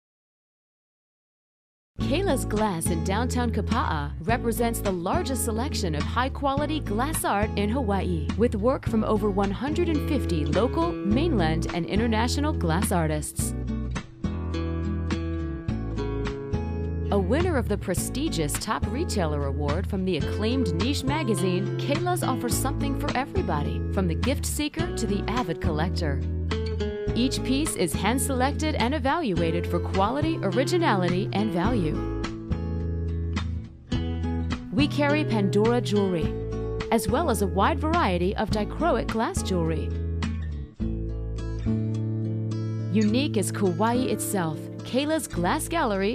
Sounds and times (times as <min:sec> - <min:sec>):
Speech: 0:02.0 - 0:13.5, 0:17.1 - 0:26.2, 0:27.2 - 0:32.0, 0:34.8 - 0:39.9, 0:42.9 - 0:46.1
Music: 0:02.0 - 0:46.1.